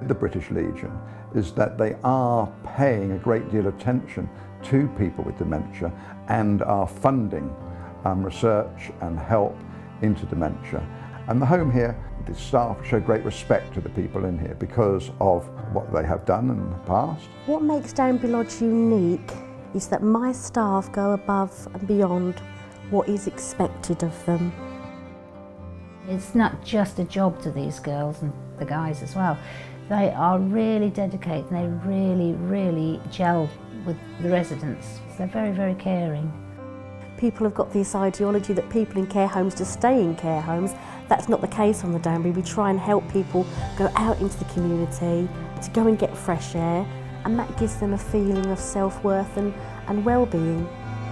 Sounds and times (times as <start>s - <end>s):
Music: 0.0s - 51.1s.